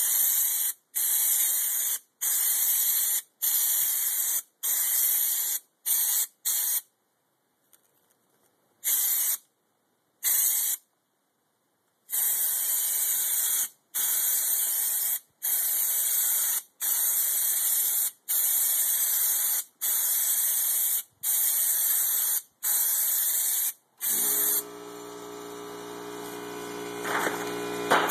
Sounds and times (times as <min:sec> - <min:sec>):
Spray: 0:00.0 - 0:06.9, 0:08.9 - 0:09.4, 0:10.2 - 0:10.9, 0:12.1 - 0:28.1.